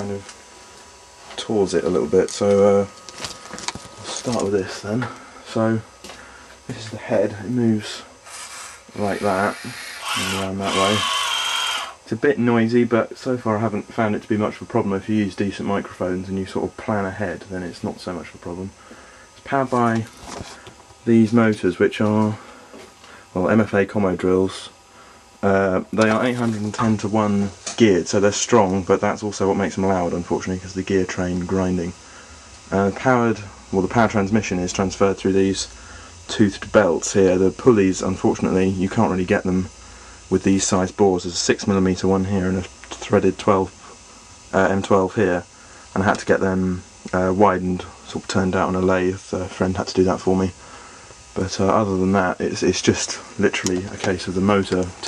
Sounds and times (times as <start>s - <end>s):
Speech: 0.0s - 0.3s, 1.3s - 3.0s, 4.0s - 5.9s, 6.7s - 8.1s, 8.9s - 11.2s, 12.1s - 18.8s, 19.4s - 20.2s, 21.0s - 22.4s, 23.3s - 24.8s, 25.4s - 32.0s, 32.7s - 39.7s, 40.3s - 43.8s, 44.5s - 50.6s, 51.4s - 55.0s.